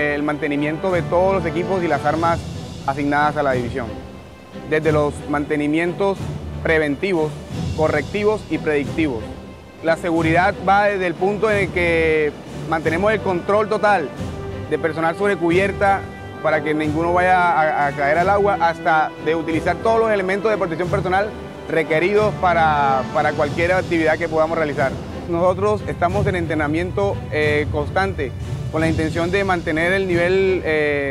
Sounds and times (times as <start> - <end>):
Speech: 0.0 - 3.9, 4.7 - 9.2, 9.9 - 14.1, 14.7 - 31.1
Music: 0.0 - 31.1.